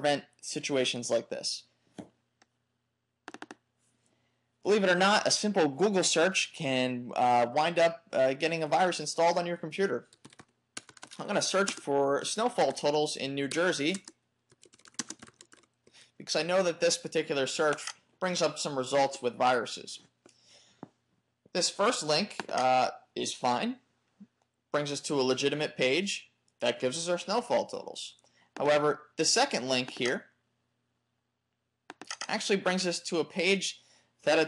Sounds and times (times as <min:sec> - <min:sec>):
Speech: 0:00.0 - 0:01.7, 0:04.6 - 0:10.1, 0:11.2 - 0:14.1, 0:16.2 - 0:20.1, 0:21.5 - 0:23.8, 0:24.8 - 0:30.4, 0:32.2 - 0:34.4.